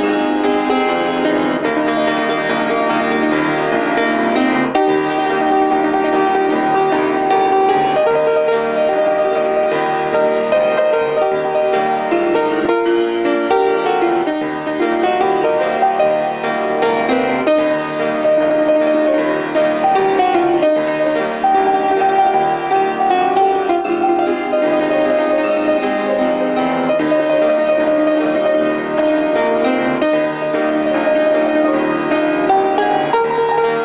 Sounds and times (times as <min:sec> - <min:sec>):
Gospel music: 0:00.0 - 0:33.8.